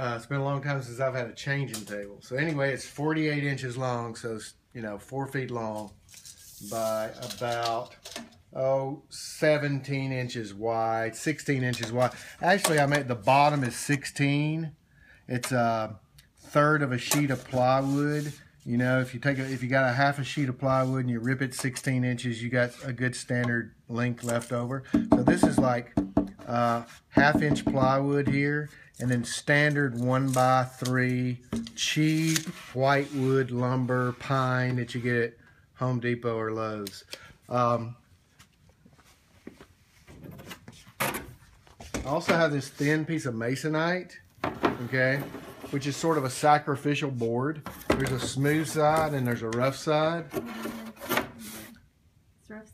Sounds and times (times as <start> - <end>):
Speech: 0.0 - 6.0, 6.6 - 25.9, 26.5 - 38.0, 42.0 - 50.3.